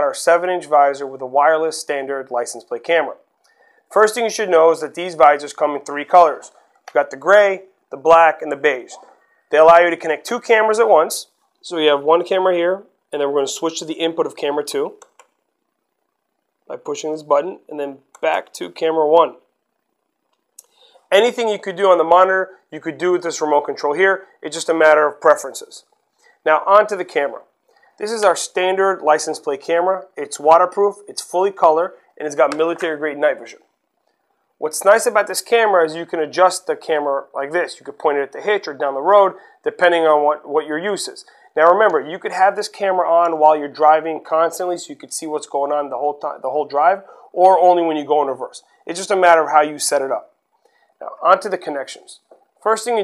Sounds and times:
Speech: 0.0 - 3.2, 3.9 - 15.0, 16.7 - 19.4, 21.1 - 25.8, 26.5 - 27.4, 28.0 - 33.6, 34.6 - 50.3, 51.0 - 53.0.

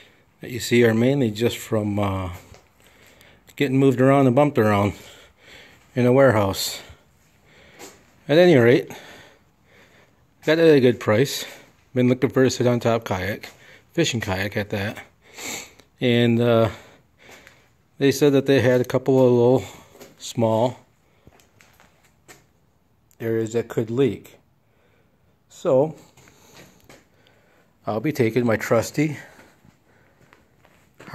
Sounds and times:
Speech: 0.4 - 2.5, 3.6 - 5.1, 6.0 - 7.0, 8.3 - 9.1, 10.4 - 15.1, 16.0 - 16.9, 18.0 - 20.8, 23.2 - 24.4, 25.5 - 26.1, 27.8 - 29.4.

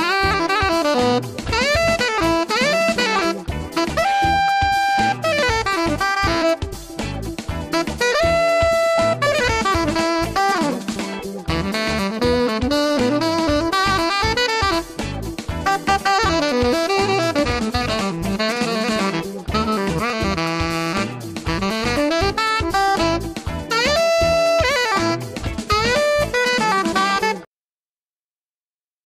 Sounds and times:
Music: 0.0 - 27.5.

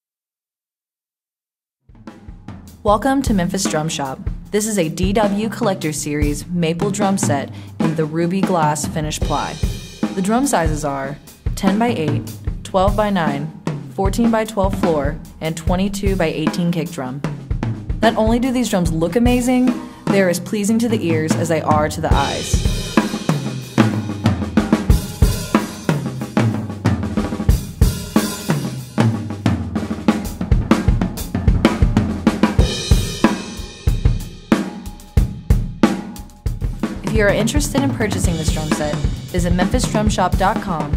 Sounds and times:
Bass drum: 1.9 - 40.9
Drum kit: 1.9 - 40.9.

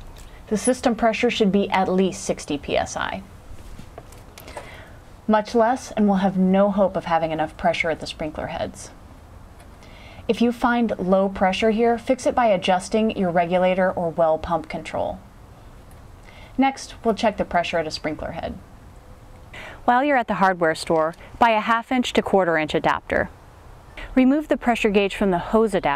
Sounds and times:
Speech: 0.5 - 3.3, 5.3 - 9.0, 10.3 - 15.2, 16.6 - 18.6, 19.9 - 23.3, 24.0 - 25.9.

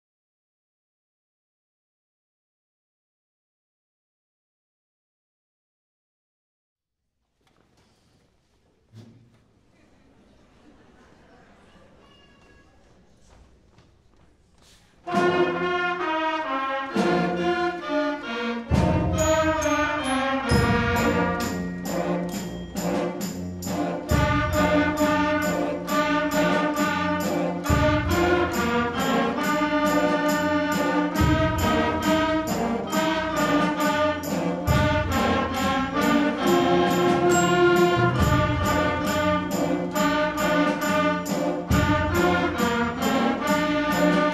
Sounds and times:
Jingle bell: 19.0 - 44.3.

